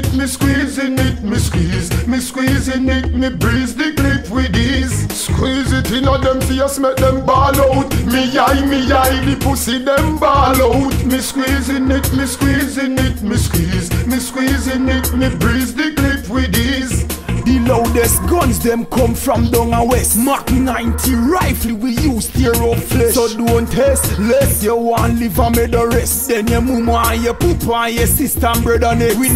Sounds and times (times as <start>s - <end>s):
Music: 0.0s - 29.3s.